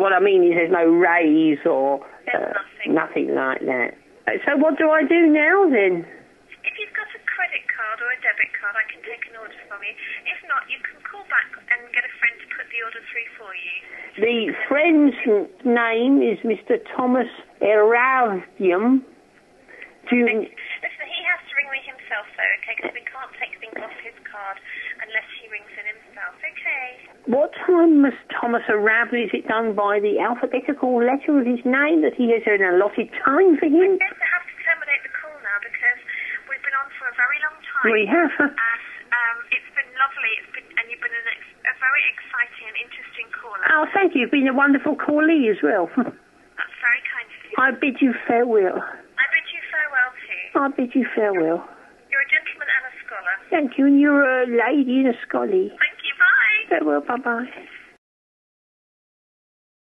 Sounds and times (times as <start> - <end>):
Speech: 0.0 - 19.0, 20.0 - 58.0.